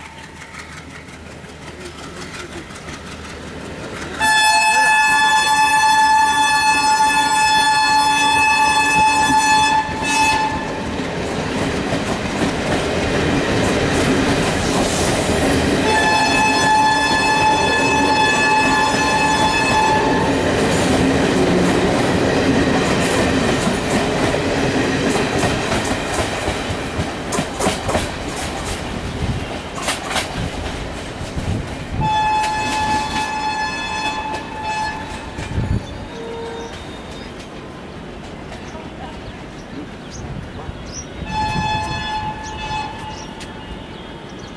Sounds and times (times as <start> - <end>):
Clickety-clack: 0.0 - 4.3, 8.9 - 15.8, 18.5 - 31.8, 34.3 - 35.6
Railroad car, train wagon: 0.0 - 44.5
Train horn: 4.2 - 11.0, 15.8 - 20.7, 31.9 - 37.1, 41.2 - 44.4.